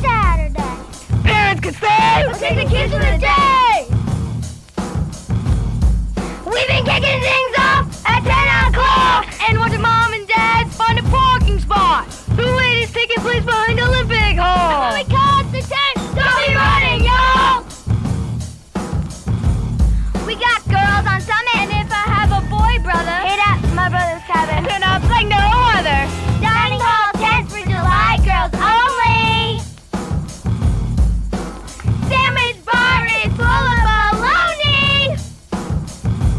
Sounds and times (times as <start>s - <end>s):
Speech: 0.0s - 3.9s, 6.5s - 17.6s, 20.2s - 29.6s
Music: 0.0s - 36.3s.